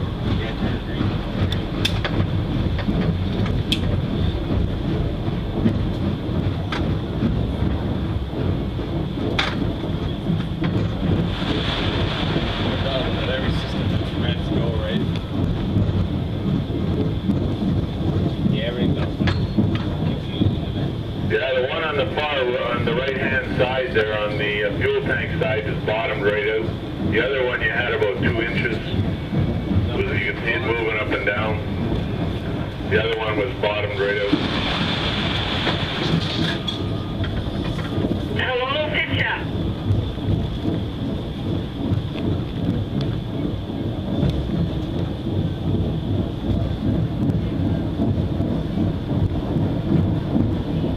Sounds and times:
Speech: 20.1s - 29.0s, 29.9s - 31.7s, 32.9s - 34.4s, 38.4s - 39.5s.

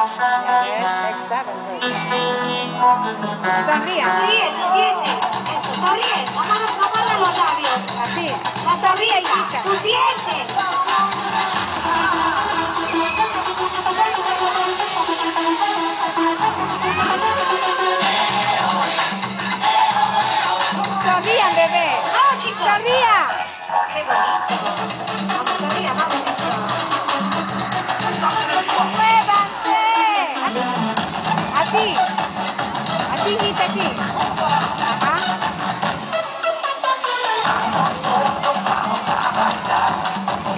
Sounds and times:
Electronica: 0.0s - 40.5s.

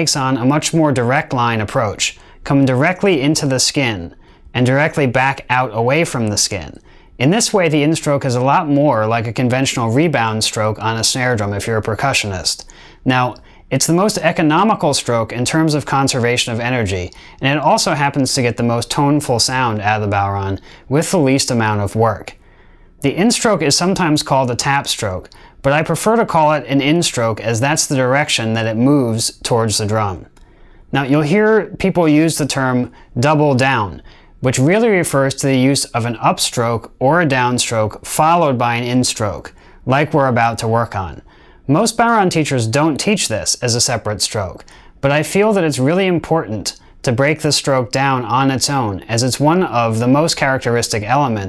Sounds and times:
Speech: 0.0s - 22.4s, 23.0s - 30.3s, 30.9s - 51.4s.

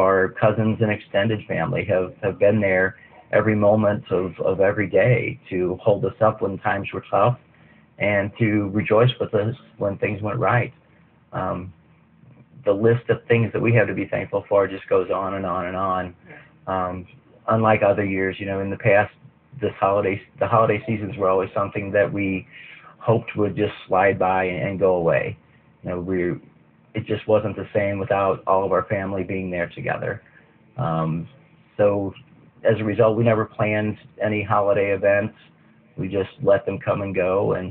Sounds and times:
Speech: 0.0s - 7.4s, 8.0s - 37.7s.

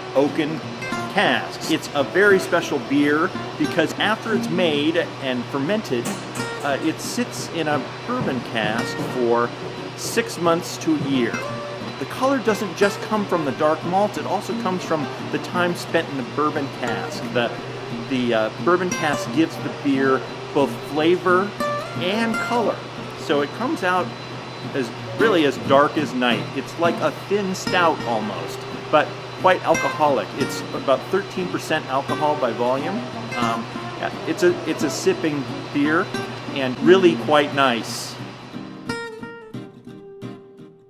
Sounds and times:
Music: 0.0s - 40.8s
Speech: 0.2s - 11.4s, 12.0s - 24.1s, 24.7s - 38.2s.

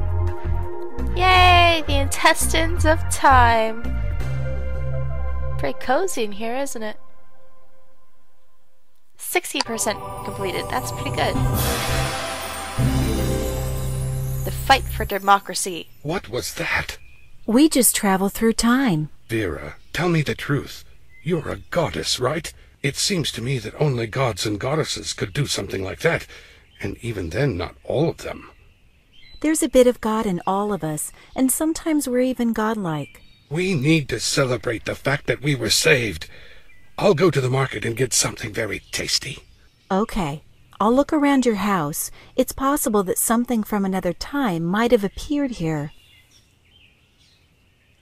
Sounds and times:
Conversation: 1.0s - 46.5s.

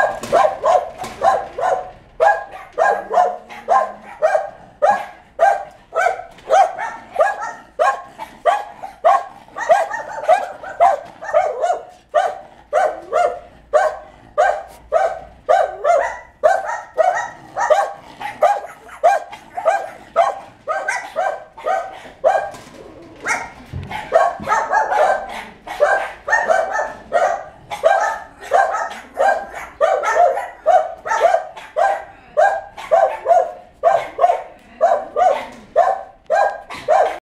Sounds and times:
Bow-wow: 0.0s - 37.2s.

